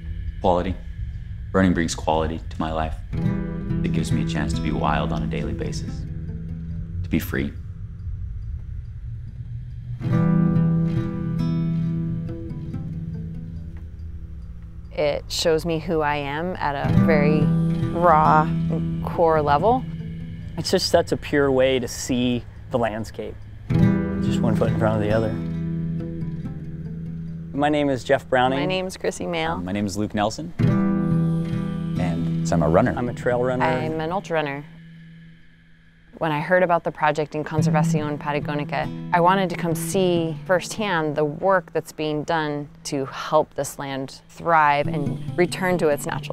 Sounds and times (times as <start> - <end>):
Music: 0.0 - 46.3
Speech: 0.5 - 0.8, 1.6 - 3.0, 3.9 - 6.0, 7.2 - 7.6, 15.0 - 18.5, 32.0 - 34.6.